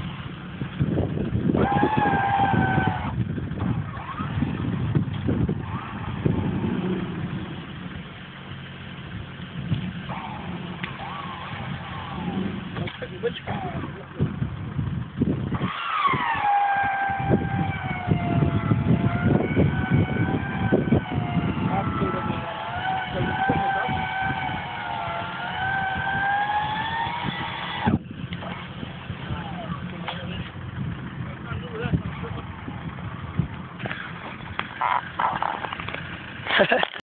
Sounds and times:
Speech: 12.8s - 14.3s, 21.7s - 24.1s, 29.3s - 30.6s, 31.2s - 32.5s.

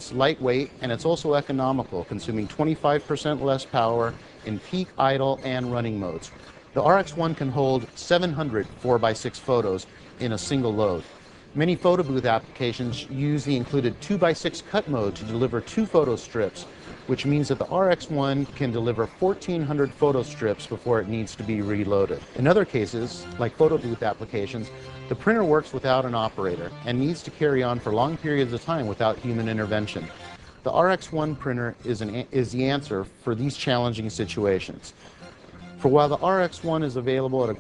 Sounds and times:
Speech: 0.0s - 35.0s, 35.8s - 37.6s.

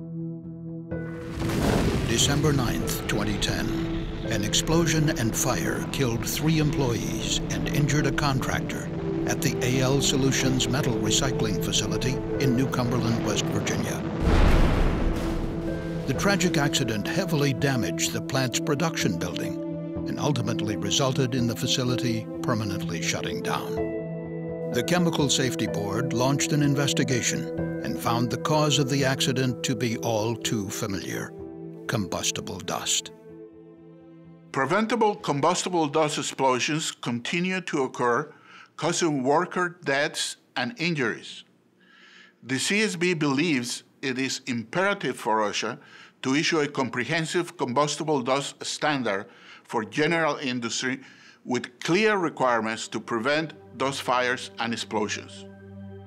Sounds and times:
Music: 0.0s - 35.9s, 51.9s - 56.0s
Speech: 2.1s - 14.0s, 16.1s - 23.8s, 24.7s - 33.1s, 34.6s - 41.5s, 42.4s - 55.4s.

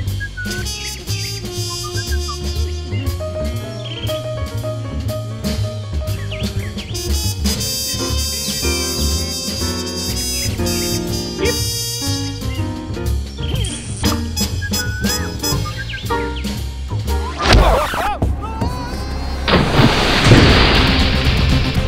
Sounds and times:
Swing music: 0.0s - 21.8s.

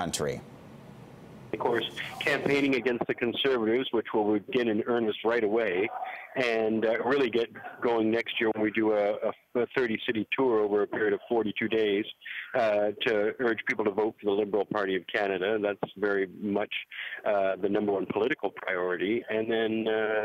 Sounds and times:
Speech: 0.0s - 0.4s, 1.6s - 20.2s.

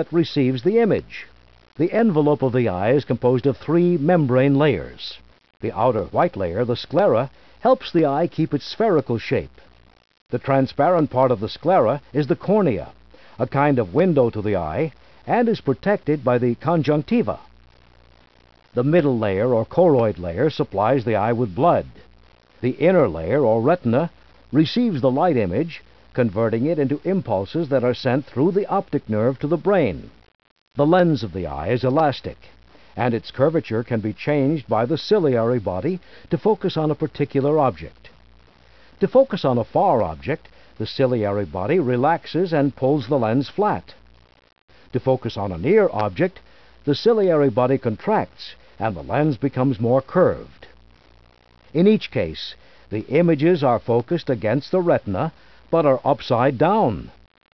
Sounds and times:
Speech: 0.0s - 9.6s, 10.3s - 17.5s, 18.8s - 22.0s, 22.6s - 30.1s, 30.8s - 38.1s, 39.0s - 44.0s, 44.9s - 50.8s, 51.7s - 57.2s.

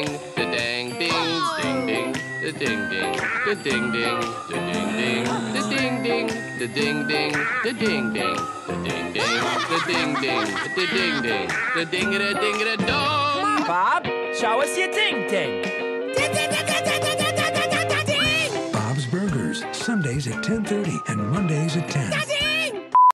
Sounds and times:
Music: 0.0s - 23.0s
Speech: 0.6s - 1.9s, 2.5s - 6.8s, 9.2s - 15.6s, 17.8s - 22.8s.

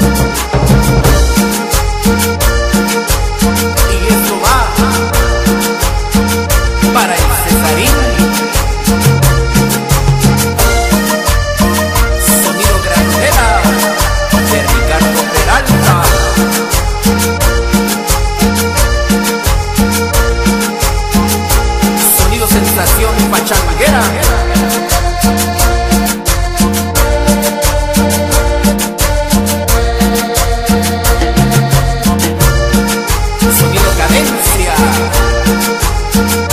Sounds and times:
Music: 0.0s - 36.5s
Speech: 3.9s - 5.0s, 7.0s - 8.2s, 12.2s - 16.4s, 22.0s - 24.4s, 33.5s - 35.2s.

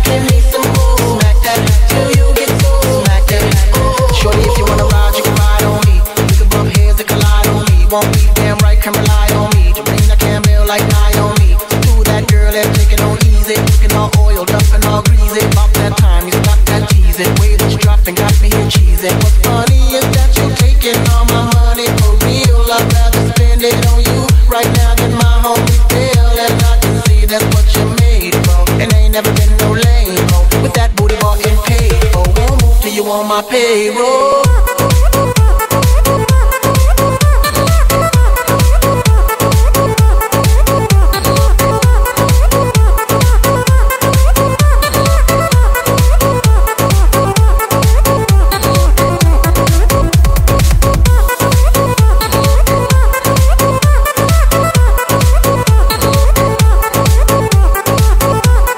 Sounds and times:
Music: 0.0s - 58.7s.

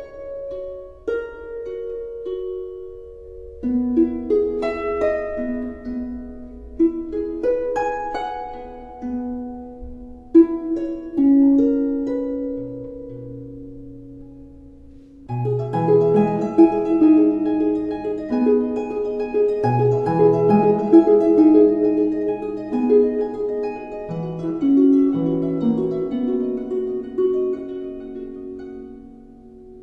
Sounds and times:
Music: 0.0s - 29.8s.

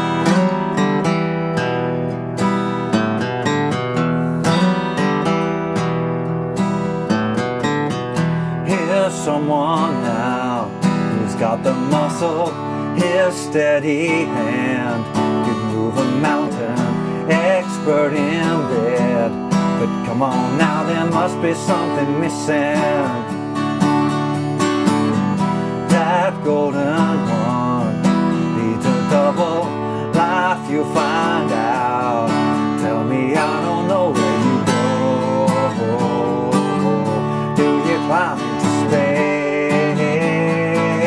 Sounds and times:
Guitar: 0.0s - 41.0s.

